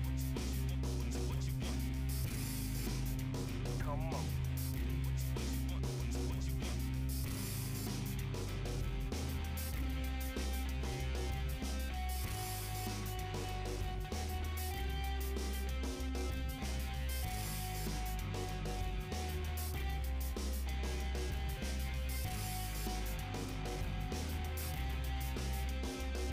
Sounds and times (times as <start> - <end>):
Music: 0.0 - 26.3.